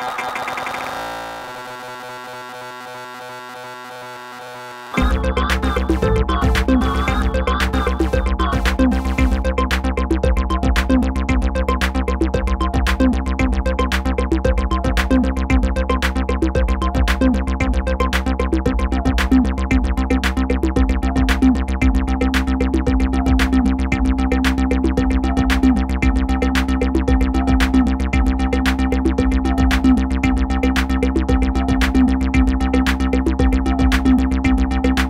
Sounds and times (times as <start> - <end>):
Music: 0.0 - 35.0.